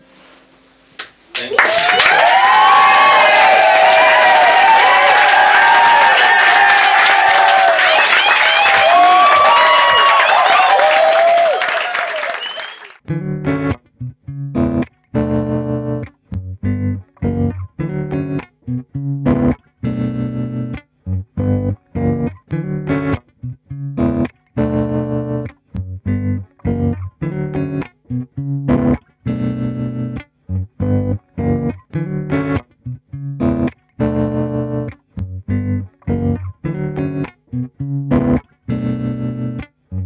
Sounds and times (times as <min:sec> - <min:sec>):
Music: 0:13.0 - 0:40.0.